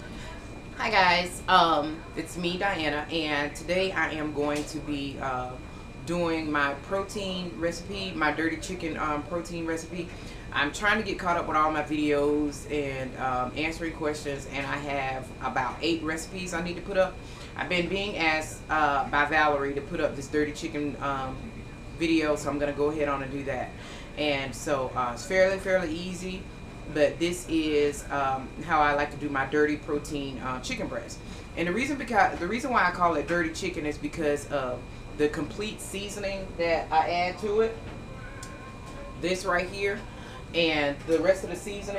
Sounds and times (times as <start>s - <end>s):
Speech: 0.2s - 37.8s, 39.2s - 41.9s.